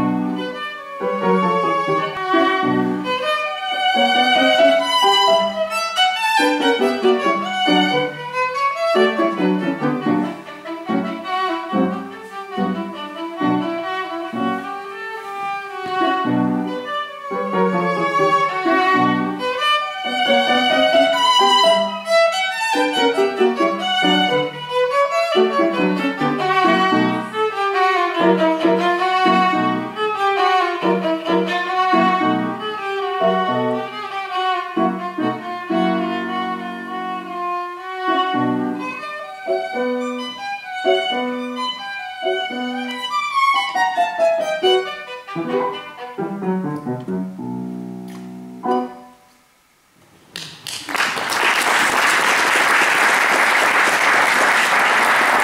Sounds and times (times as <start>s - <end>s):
Violin, fiddle: 0.0s - 46.9s.